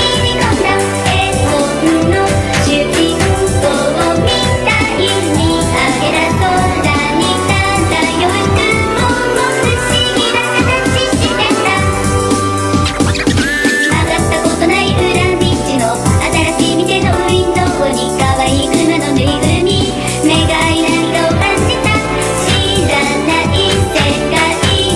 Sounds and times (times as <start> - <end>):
Music: 0.0 - 24.9.